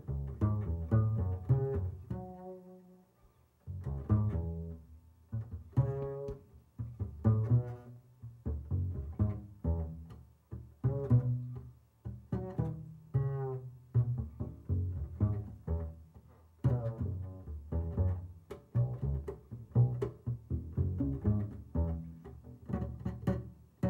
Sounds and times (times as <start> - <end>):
Double bass: 0.0 - 23.9
Plucked string instrument: 3.7 - 23.9.